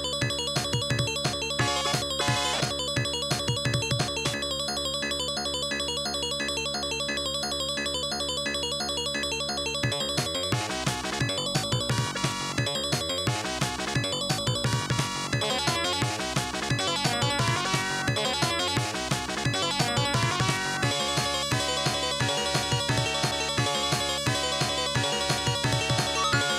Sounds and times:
Video game music: 0.0s - 26.5s.

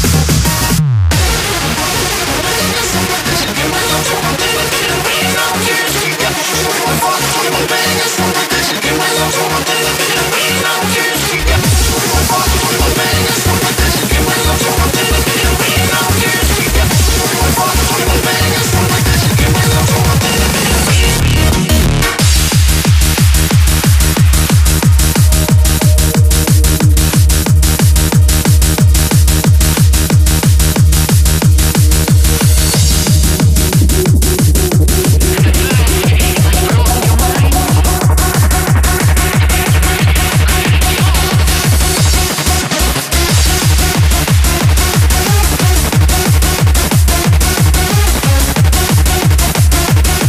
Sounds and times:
Techno: 0.0s - 50.2s.

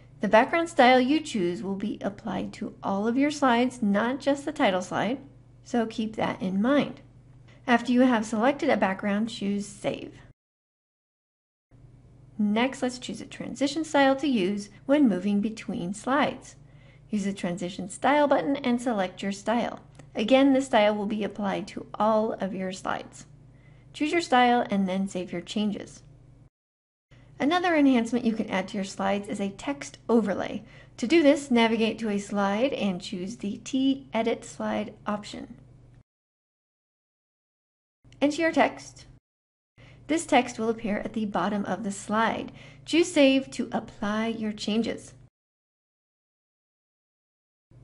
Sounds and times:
Narration, monologue: 0.0s - 10.4s, 11.8s - 26.5s, 27.1s - 36.0s, 38.0s - 39.2s, 39.8s - 45.3s.

